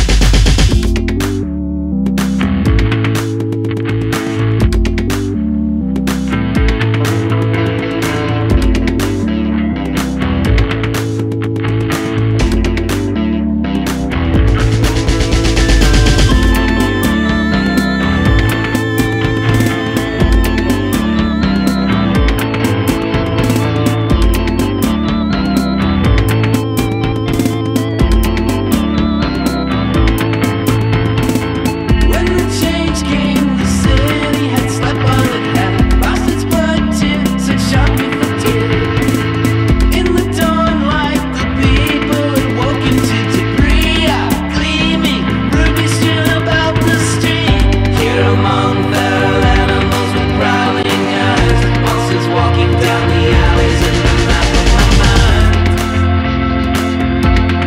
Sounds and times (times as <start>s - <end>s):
Music: 0.0s - 57.6s.